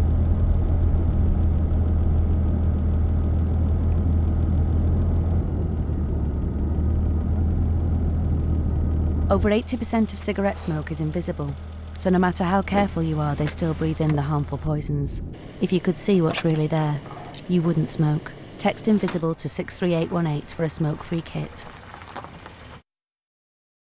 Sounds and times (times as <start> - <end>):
Speech: 9.3 - 21.6.